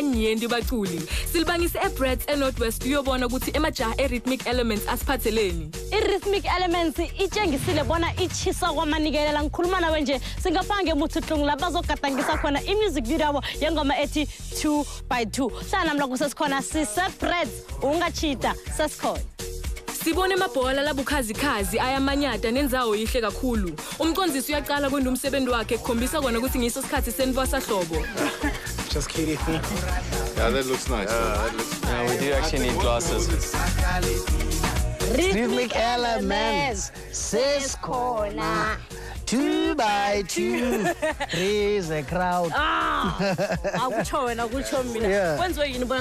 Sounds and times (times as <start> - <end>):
Music: 0.0 - 46.0.